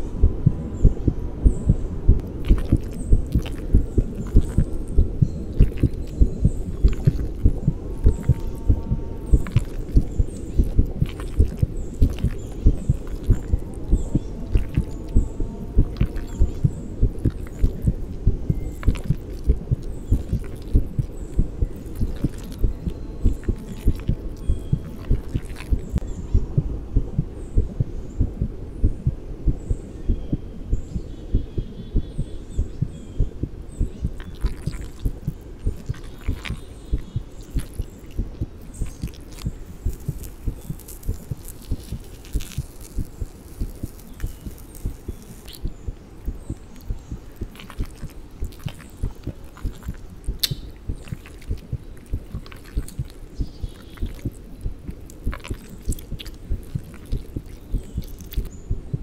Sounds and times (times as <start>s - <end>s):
Heart sounds, heartbeat: 0.2s - 39.1s.